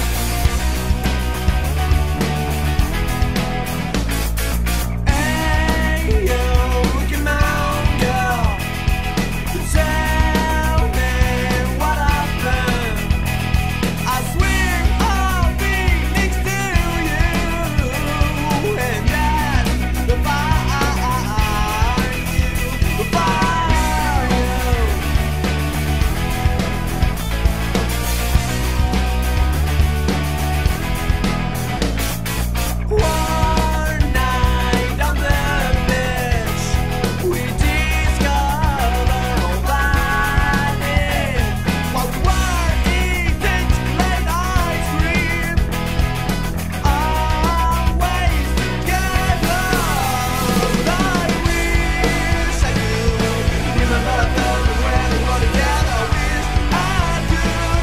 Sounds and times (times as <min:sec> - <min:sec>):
Music: 0:00.0 - 0:57.8.